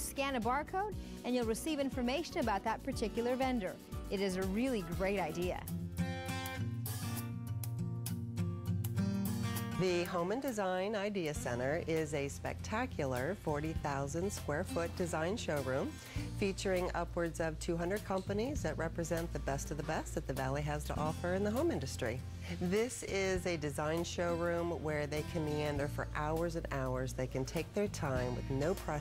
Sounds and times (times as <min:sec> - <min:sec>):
Speech: 0:00.0 - 0:05.6, 0:09.8 - 0:29.0
Music: 0:00.0 - 0:29.0.